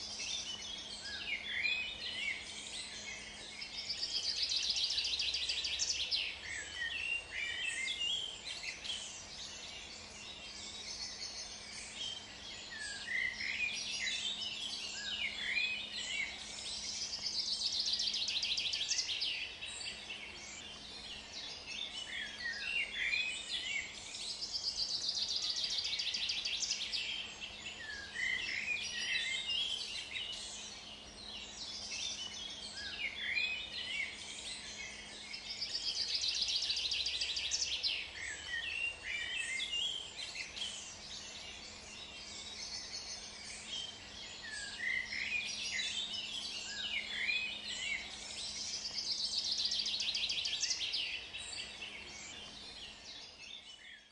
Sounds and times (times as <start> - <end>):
Environmental noise: 0.0 - 54.1.